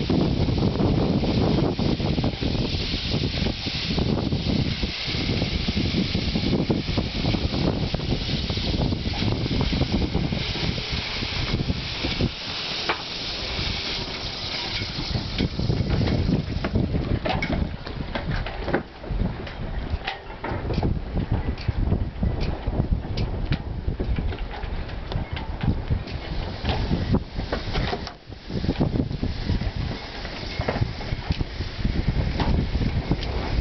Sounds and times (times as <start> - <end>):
Sailboat, sailing ship: 0.0 - 33.6.